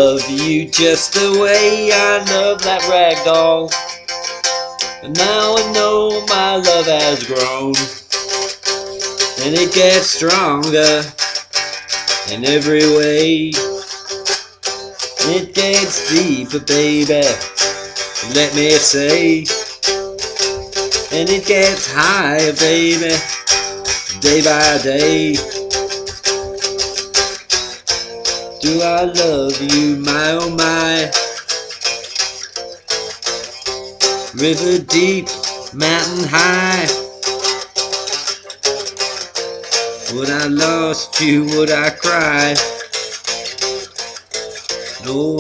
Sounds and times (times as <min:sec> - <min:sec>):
Acoustic guitar: 0:00.0 - 0:45.4.